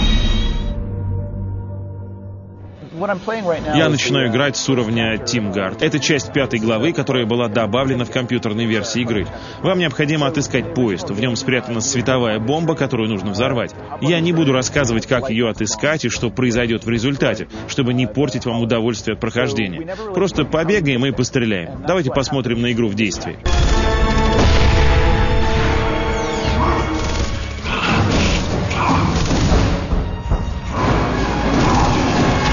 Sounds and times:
Music: 0.0s - 32.5s
Speech: 2.8s - 23.5s.

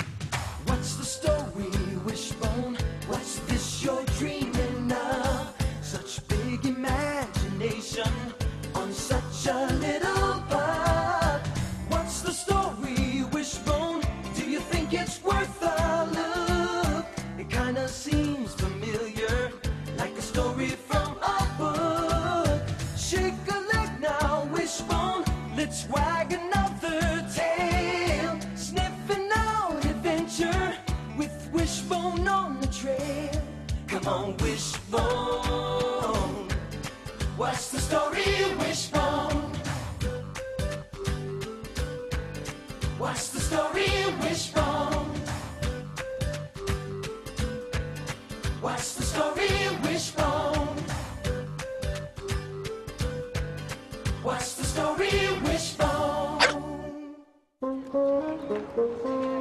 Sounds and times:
Music: 0.0s - 59.4s.

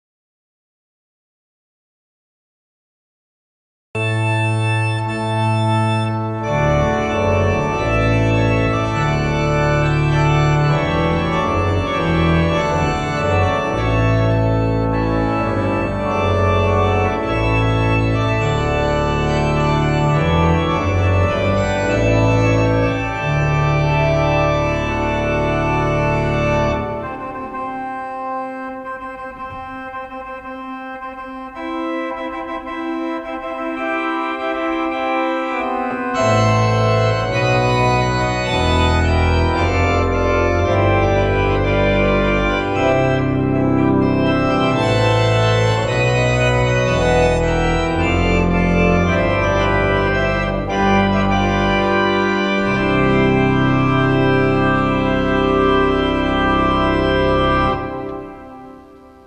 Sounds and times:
Organ: 4.0s - 59.2s
Piano: 4.0s - 59.2s.

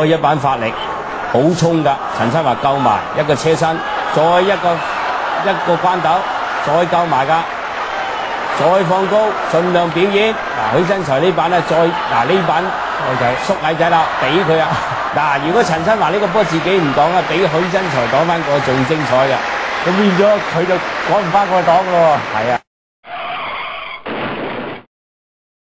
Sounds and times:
Speech: 0.0s - 4.8s, 5.4s - 7.5s, 8.6s - 22.6s.

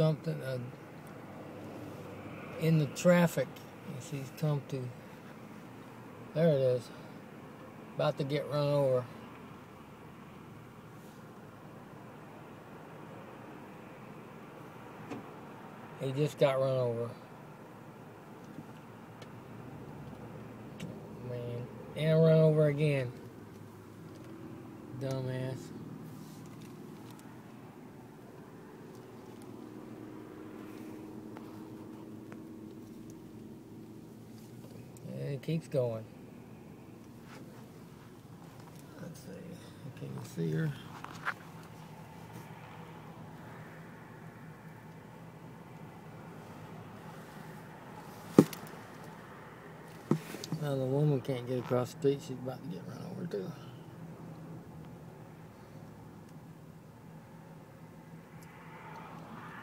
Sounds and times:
Speech: 0.0s - 0.8s, 2.6s - 5.0s, 6.4s - 7.0s, 8.0s - 9.1s, 16.0s - 17.2s, 21.2s - 23.2s, 25.0s - 25.7s, 35.0s - 36.1s, 38.9s - 40.9s, 50.5s - 53.8s.

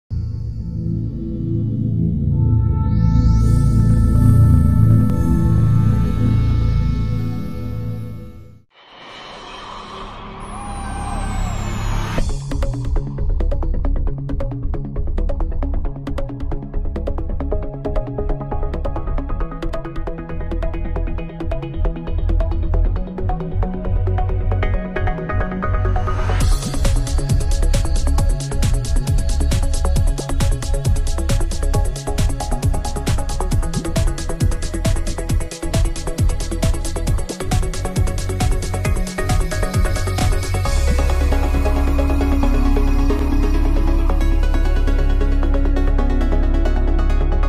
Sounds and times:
Electronic music: 0.1s - 8.6s, 9.3s - 47.4s.

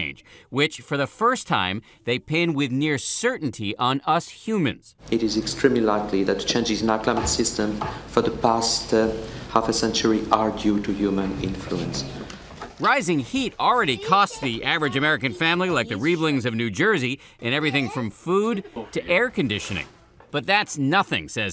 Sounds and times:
Speech: 0.0s - 12.1s, 12.8s - 21.5s.

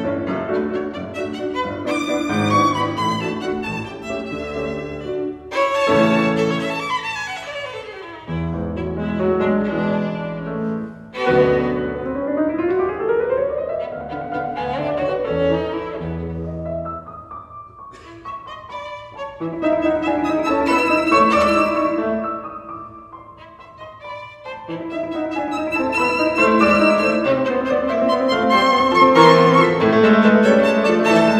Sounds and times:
Violin, fiddle: 0.0s - 12.2s, 13.7s - 16.6s, 18.0s - 22.6s, 23.2s - 31.3s.

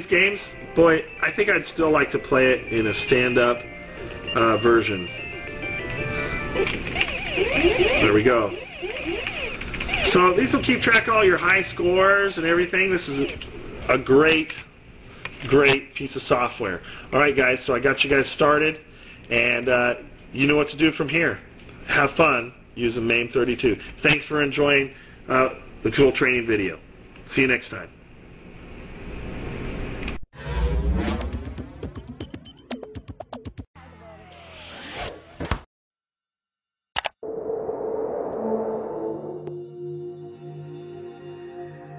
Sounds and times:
Sound effect: 6.0s - 10.5s, 30.4s - 35.7s, 37.0s - 40.2s.

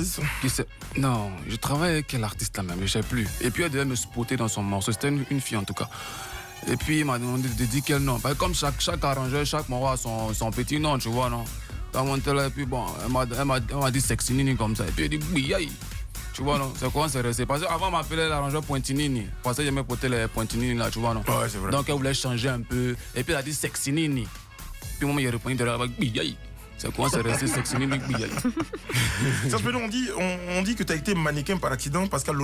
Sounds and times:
Speech: 0.0s - 5.9s, 6.7s - 15.8s, 16.4s - 24.3s, 25.0s - 28.5s, 29.4s - 32.4s
Music: 0.0s - 32.4s.

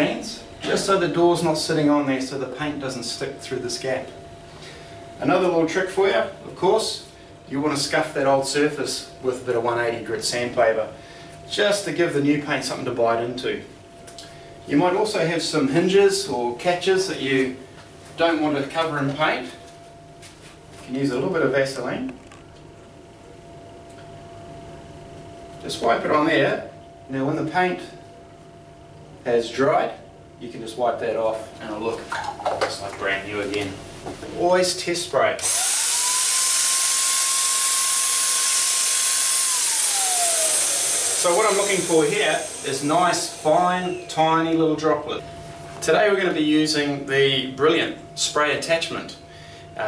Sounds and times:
Speech: 0.0s - 4.2s, 5.2s - 13.7s, 14.7s - 17.6s, 18.2s - 19.6s, 20.8s - 22.2s, 25.6s - 28.0s, 29.2s - 35.4s, 41.2s - 45.2s, 45.8s - 49.2s.

